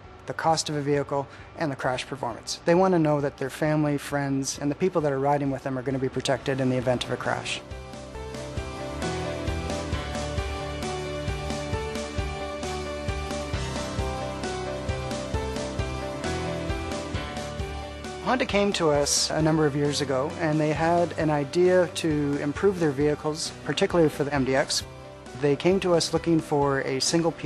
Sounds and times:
Music: 0:00.0 - 0:27.4
Speech: 0:00.3 - 0:07.6, 0:18.2 - 0:27.4.

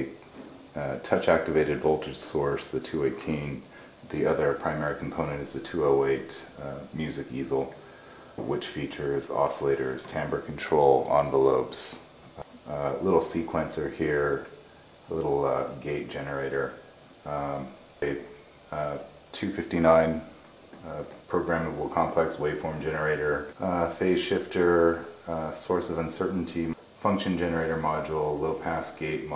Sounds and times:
Speech: 0:00.0 - 0:07.8, 0:08.4 - 0:29.3.

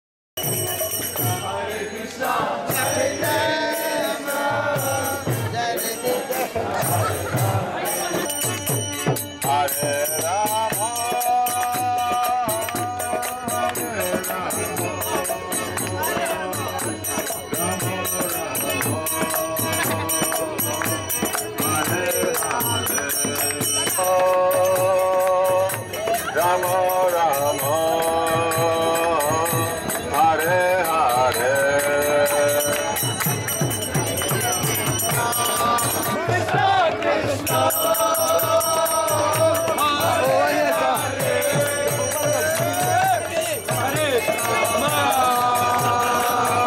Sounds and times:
Mantra: 0:00.4 - 0:46.6.

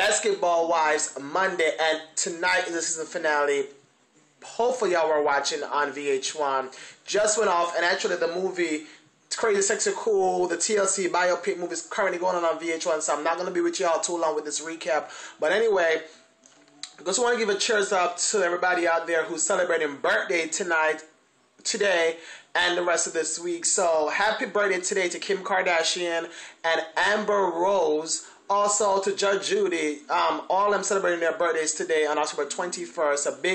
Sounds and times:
Speech: 0:00.0 - 0:03.8, 0:04.4 - 0:16.1, 0:16.8 - 0:33.5.

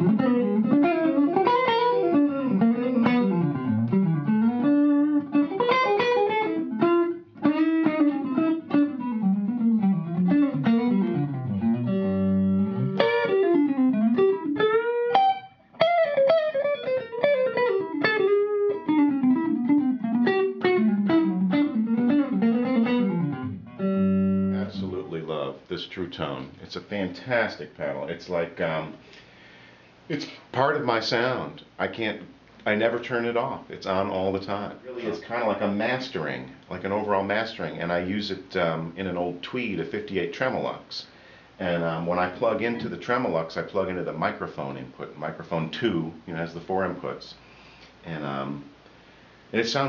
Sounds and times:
Speech: 0:24.6 - 0:29.0, 0:30.1 - 0:47.4, 0:48.0 - 0:48.7, 0:49.5 - 0:49.8.

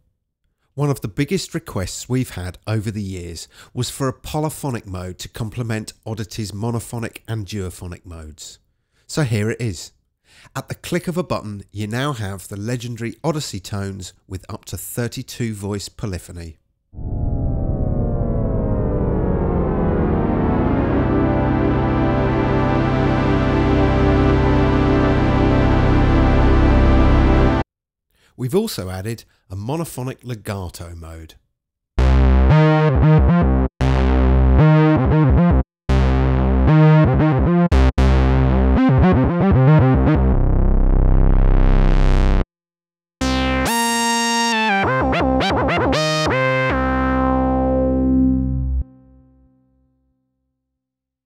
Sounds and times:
Speech: 0:00.8 - 0:16.6, 0:28.4 - 0:31.4
Synthesizer: 0:18.7 - 0:27.6, 0:32.0 - 0:40.6, 0:43.2 - 0:49.0.

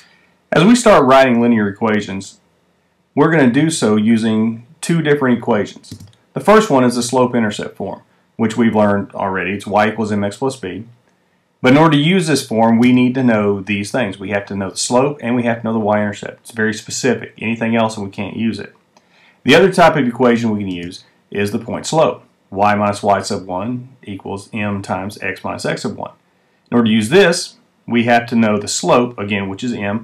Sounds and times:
Speech: 0:00.5 - 0:02.4, 0:03.2 - 0:11.0, 0:11.6 - 0:18.8, 0:19.4 - 0:30.0.

